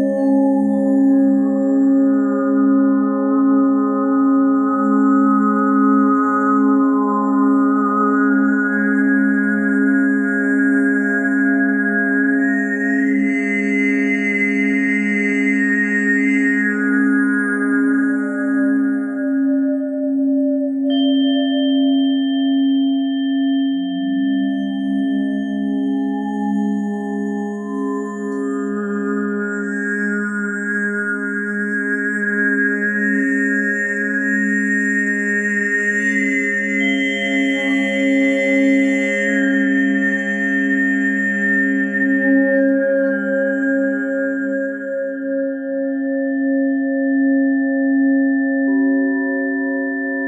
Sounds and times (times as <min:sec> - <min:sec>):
Singing bowl: 0:00.0 - 0:50.2.